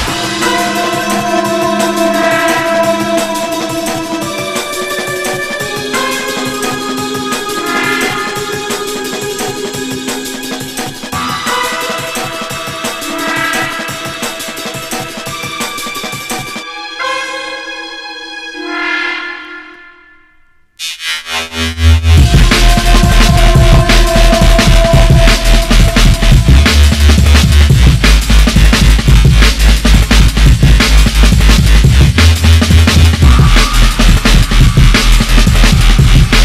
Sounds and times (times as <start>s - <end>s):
Drum and bass: 0.0s - 17.6s, 20.8s - 36.4s.